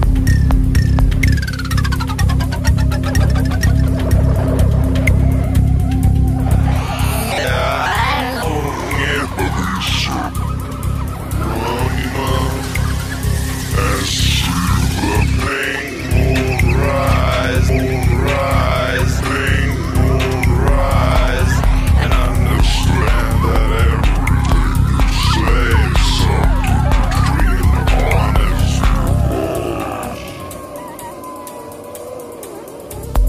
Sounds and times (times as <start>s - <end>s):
Angry music: 0.0s - 33.2s.